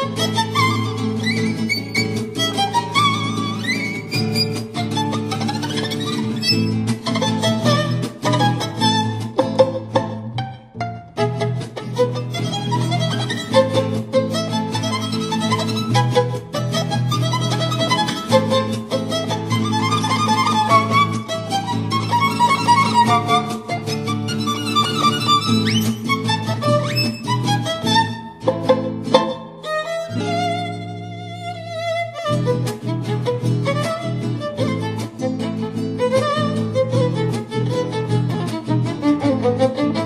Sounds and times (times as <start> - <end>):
Violin, fiddle: 0.0 - 40.0.